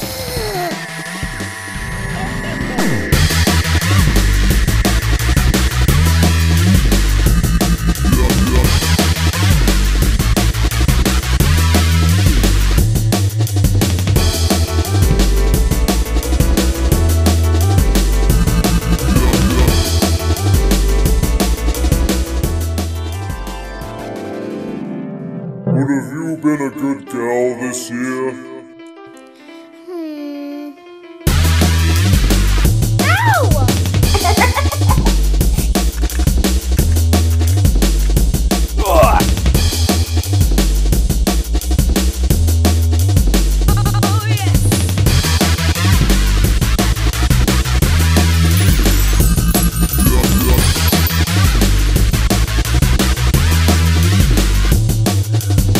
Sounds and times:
Music: 0:00.0 - 0:55.7
Speech: 0:08.1 - 0:08.7, 0:19.1 - 0:19.8, 0:33.0 - 0:33.8, 0:38.8 - 0:39.3, 0:43.7 - 0:44.7, 0:50.0 - 0:50.7.

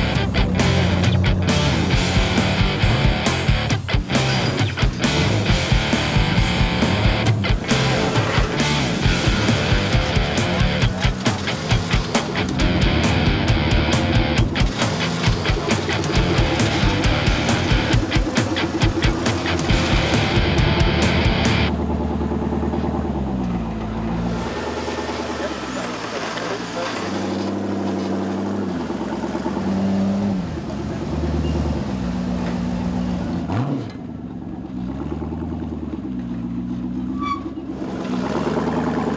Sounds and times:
Music: 0:00.0 - 0:21.7
Truck: 0:00.0 - 0:39.1.

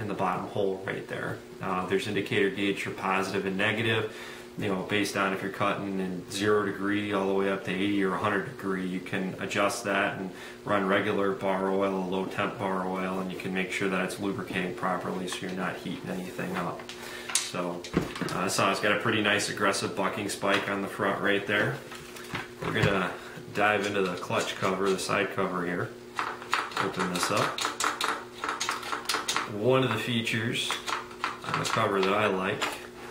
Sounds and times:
Speech: 0:00.0 - 0:16.8, 0:17.5 - 0:21.8, 0:22.6 - 0:26.0, 0:26.8 - 0:27.6, 0:29.5 - 0:32.8.

